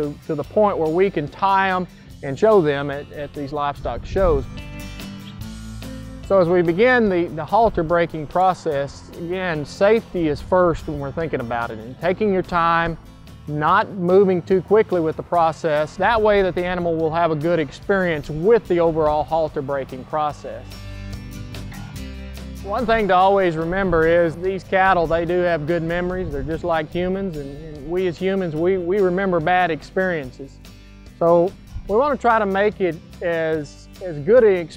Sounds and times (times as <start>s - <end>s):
Speech: 0.0s - 4.5s, 6.3s - 20.7s, 22.6s - 30.5s, 31.2s - 34.7s
Music: 0.0s - 34.7s.